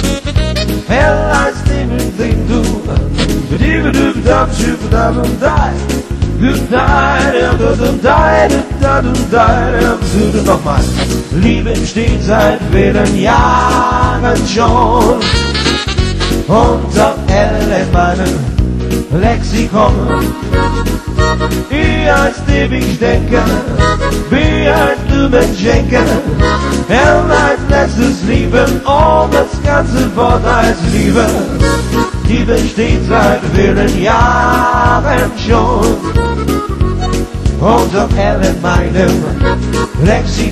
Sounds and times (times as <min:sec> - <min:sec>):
Blues: 0:00.0 - 0:40.5
Exciting music: 0:00.0 - 0:40.5
Rhythm and blues: 0:00.0 - 0:40.5.